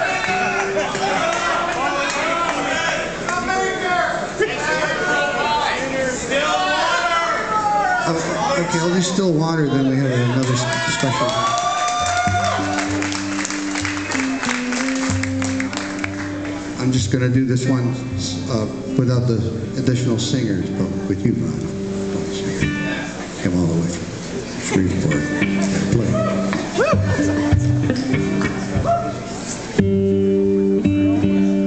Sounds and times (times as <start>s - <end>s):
Speech: 8.0s - 11.4s, 16.8s - 22.6s, 23.4s - 24.0s
Music: 12.0s - 24.0s, 24.7s - 31.6s.